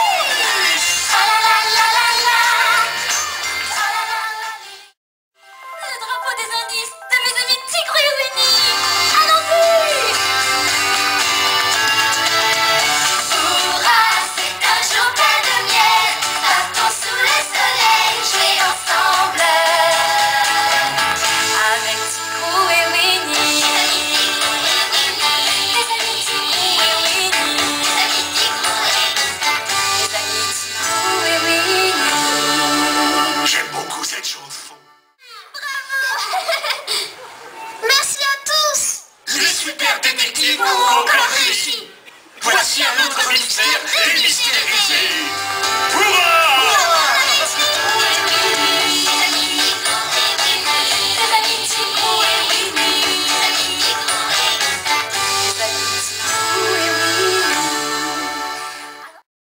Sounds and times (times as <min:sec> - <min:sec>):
Music: 0:00.0 - 0:35.2, 0:44.3 - 0:59.2.